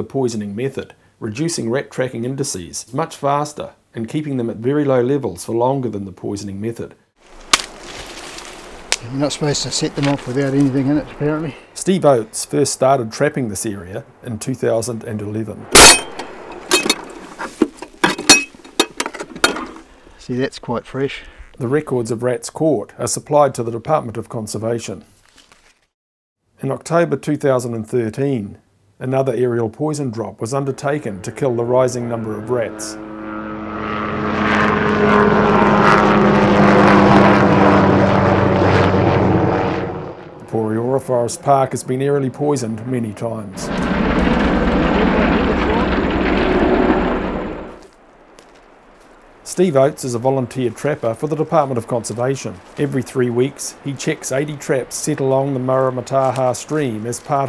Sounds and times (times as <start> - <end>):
Speech: 0.0 - 7.0, 9.0 - 15.7, 20.2 - 25.1, 26.6 - 33.0, 40.4 - 43.8, 44.8 - 46.0, 49.5 - 57.4.